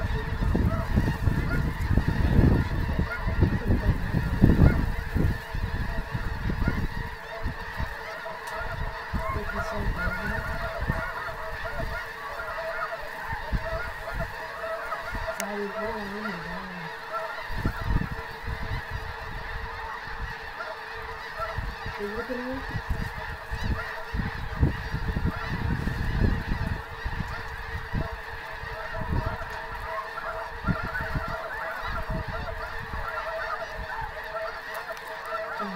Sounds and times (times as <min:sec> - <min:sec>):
Speech: 0:09.3 - 0:10.4, 0:15.4 - 0:16.9, 0:22.0 - 0:22.6.